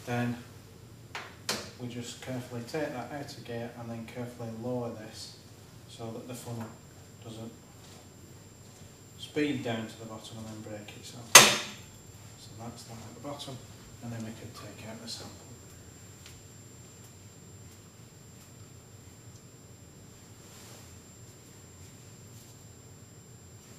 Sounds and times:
Speech: 0:00.0 - 0:00.5, 0:01.8 - 0:07.6, 0:09.2 - 0:11.4, 0:12.4 - 0:15.6.

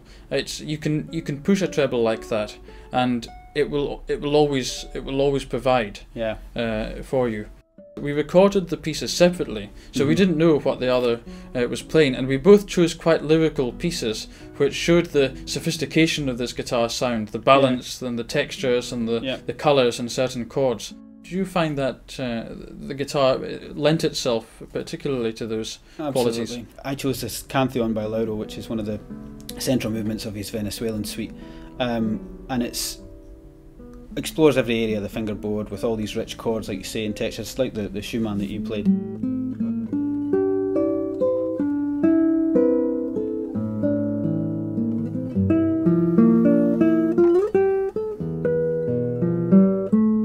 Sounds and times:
Guitar: 0:00.0 - 0:50.2
Speech: 0:00.3 - 0:33.0, 0:34.2 - 0:38.9.

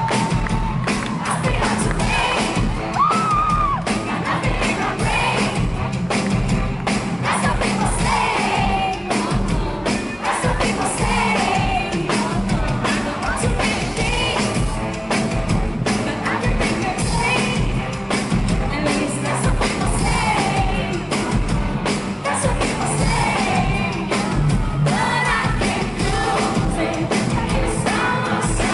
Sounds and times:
Singing: 0:00.0 - 0:05.8, 0:07.2 - 0:14.9, 0:15.9 - 0:18.0, 0:18.6 - 0:28.7
Music: 0:00.0 - 0:28.7.

